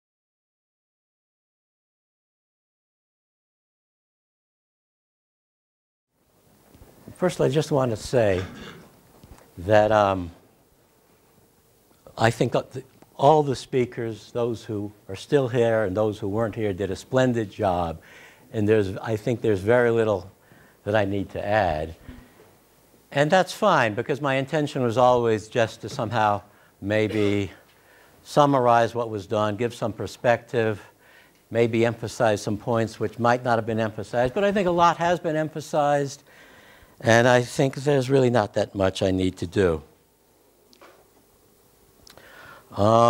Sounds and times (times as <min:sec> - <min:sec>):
Speech: 0:07.1 - 0:08.6, 0:09.6 - 0:10.4, 0:12.1 - 0:22.2, 0:23.1 - 0:27.6, 0:28.2 - 0:30.9, 0:31.5 - 0:36.2, 0:37.0 - 0:40.0, 0:42.7 - 0:43.0.